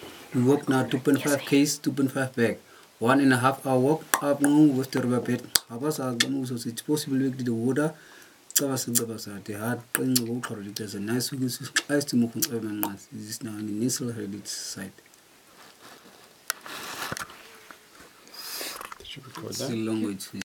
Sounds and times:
Speech: 0.4 - 8.0, 8.6 - 15.0, 19.0 - 20.4.

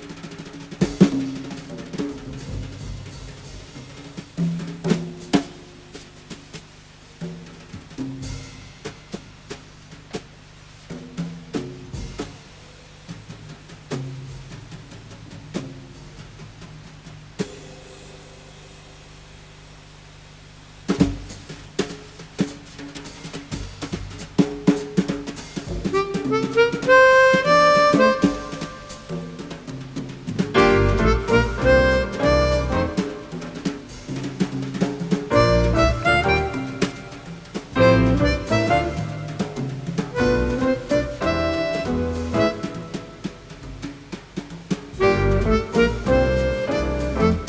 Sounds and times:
Drum: 0.0 - 47.4
Drum kit: 0.0 - 47.4.

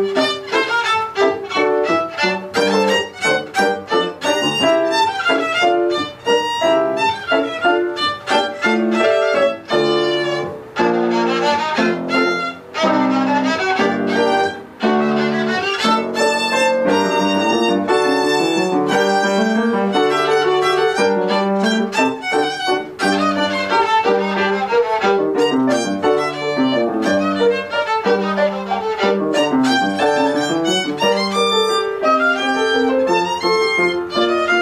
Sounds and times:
Violin, fiddle: 0.0 - 34.6.

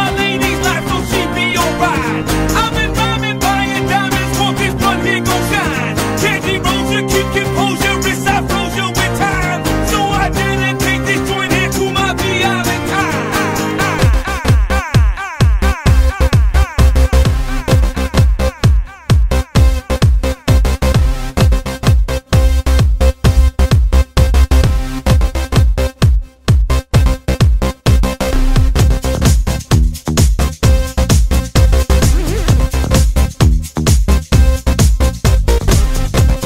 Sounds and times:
Music: 0.0 - 36.4.

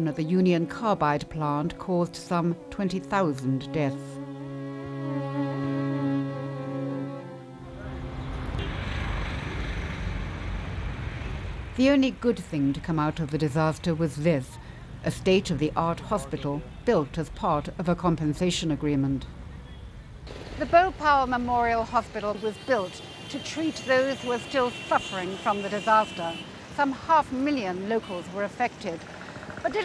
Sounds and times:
Bowed string instrument: 0.0 - 9.9.

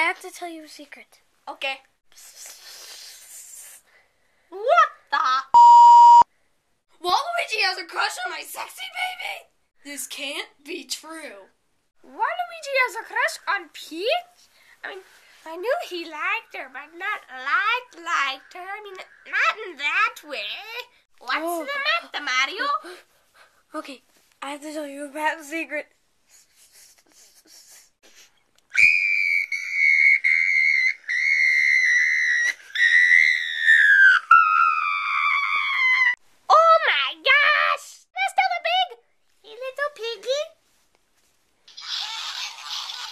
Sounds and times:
Speech: 0.0 - 1.9, 7.0 - 23.0, 23.7 - 25.9, 36.5 - 40.6
Inside, small room: 0.0 - 43.1.

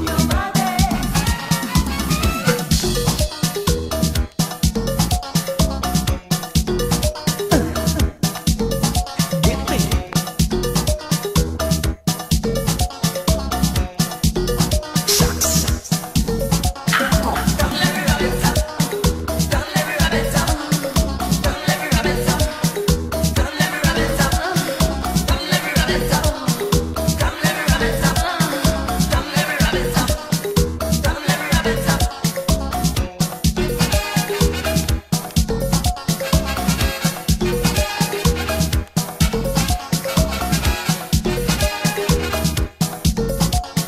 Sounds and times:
Music of Latin America: 0.0 - 43.8.

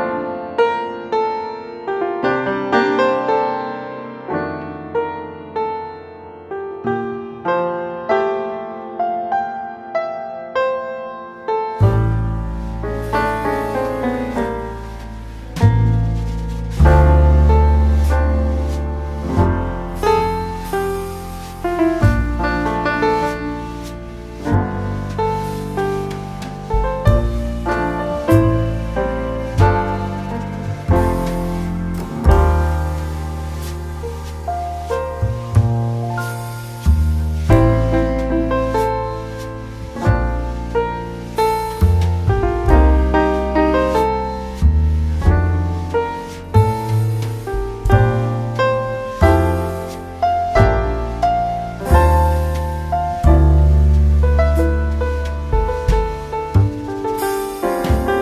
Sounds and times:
Electric piano: 0.0 - 58.2.

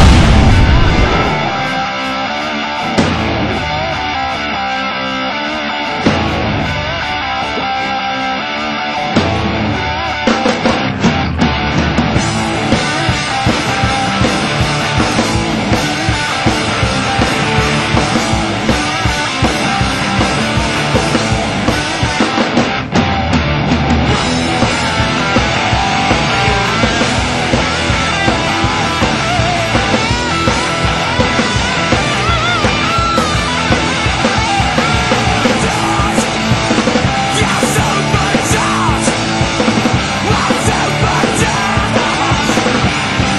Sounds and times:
Music: 0.0 - 43.3.

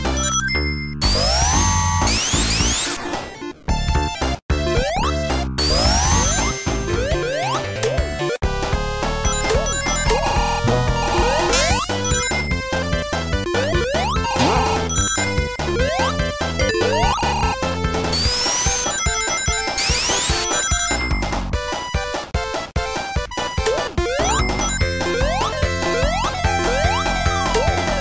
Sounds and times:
Soundtrack music: 4.0 - 19.0.

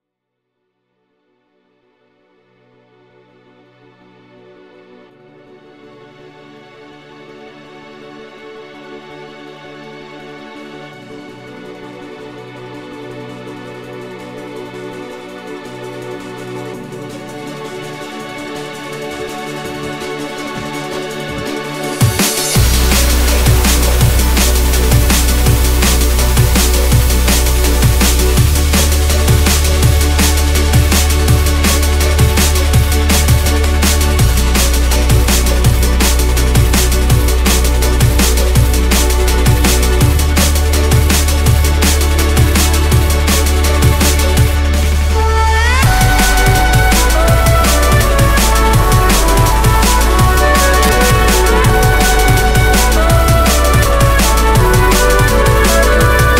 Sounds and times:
Drum kit: 19.0 - 56.4
Bass drum: 22.0 - 56.4.

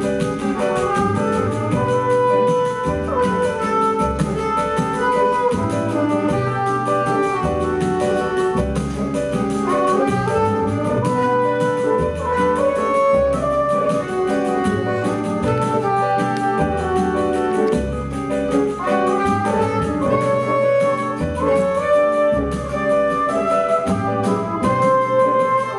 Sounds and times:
Orchestra: 0.0 - 25.7.

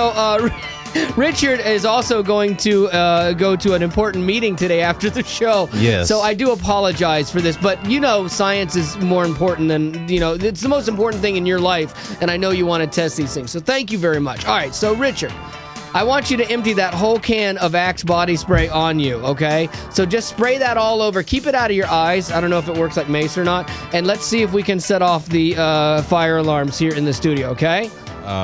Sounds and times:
Music: 0.0 - 28.4
Speech: 1.2 - 28.4.

